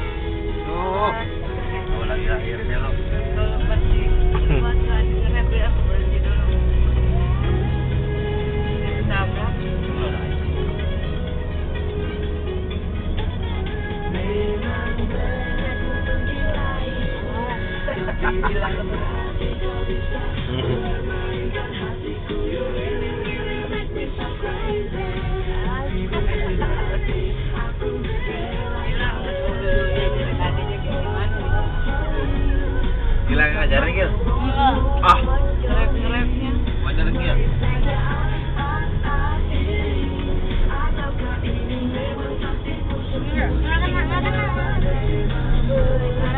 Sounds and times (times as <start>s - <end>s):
Music: 0.0s - 46.3s.